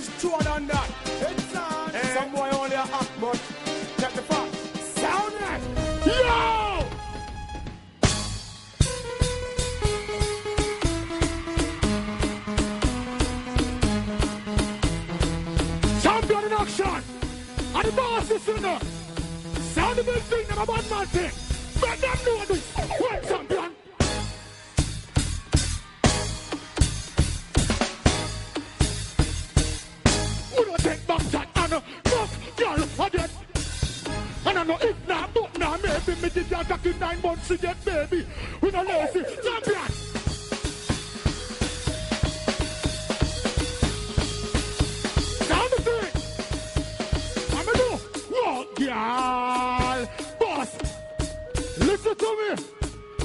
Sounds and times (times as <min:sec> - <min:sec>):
Music: 0:00.0 - 0:53.2.